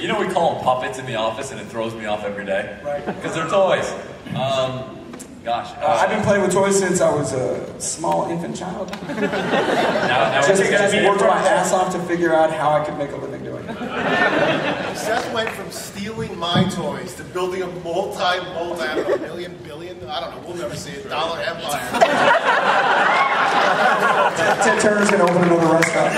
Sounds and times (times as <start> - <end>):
Speech: 0.0 - 4.9, 10.1 - 13.6, 15.0 - 22.0.